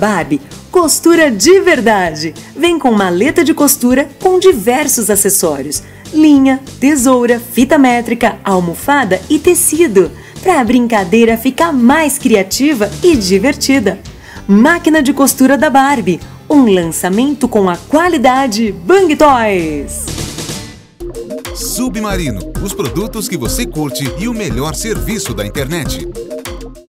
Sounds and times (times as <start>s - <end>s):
Speech: 0.0s - 20.1s, 21.6s - 26.1s
Music: 0.0s - 26.9s.